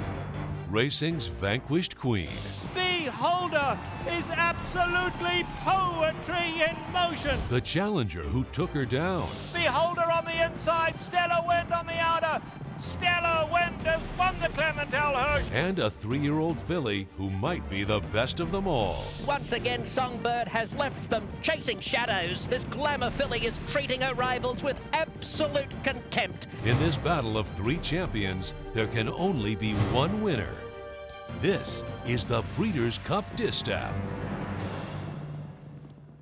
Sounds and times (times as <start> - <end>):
Music: 0.0 - 36.2
Speech: 0.7 - 30.6, 31.4 - 34.0.